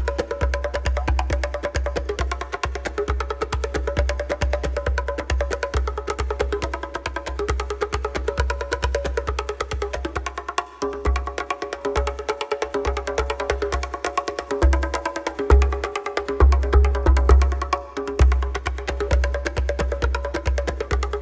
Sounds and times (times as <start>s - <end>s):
Music: 0.0s - 21.2s.